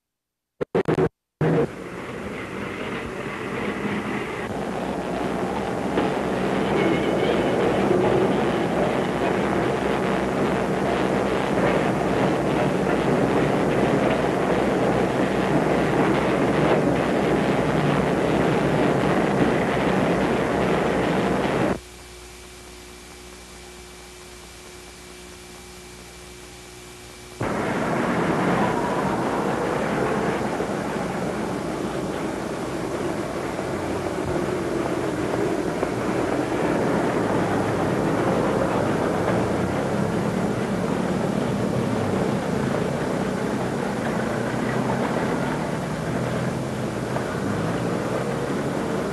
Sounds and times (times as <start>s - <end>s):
Outside, urban or manmade: 0.0s - 49.1s
Bus: 0.6s - 21.8s, 27.4s - 49.1s.